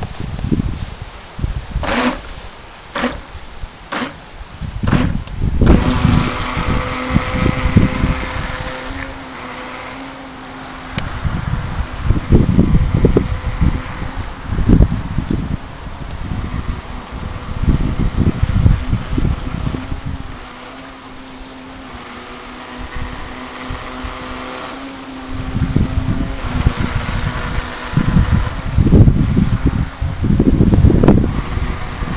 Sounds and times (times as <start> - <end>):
Motorboat, speedboat: 4.9 - 32.1.